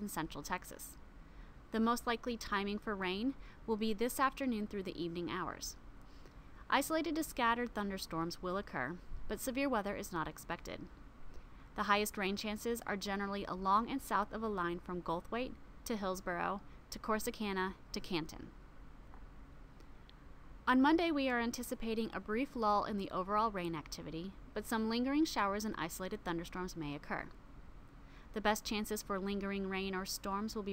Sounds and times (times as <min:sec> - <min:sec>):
Speech: 0:00.0 - 0:01.0, 0:01.8 - 0:05.8, 0:06.7 - 0:10.9, 0:11.8 - 0:18.6, 0:20.7 - 0:27.4, 0:28.4 - 0:30.7.